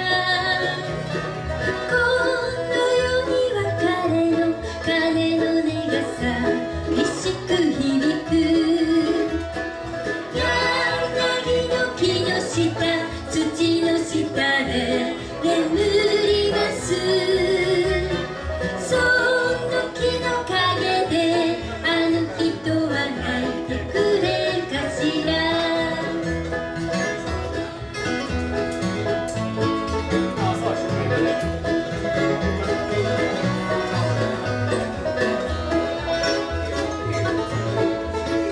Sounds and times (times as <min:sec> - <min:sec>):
Bluegrass: 0:00.0 - 0:38.5
Guitar: 0:00.0 - 0:38.5.